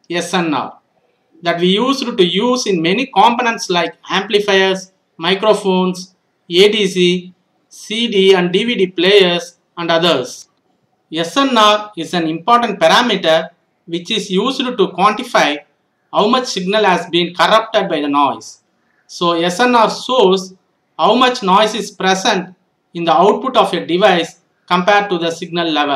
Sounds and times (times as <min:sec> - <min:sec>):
Speech: 0:00.1 - 0:00.8, 0:01.4 - 0:10.5, 0:11.1 - 0:25.9.